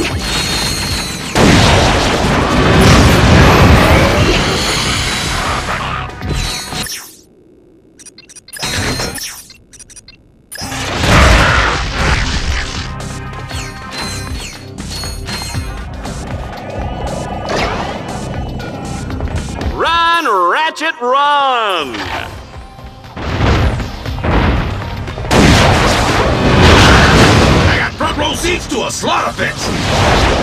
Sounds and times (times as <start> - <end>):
Music: 11.9 - 20.2, 21.7 - 29.6.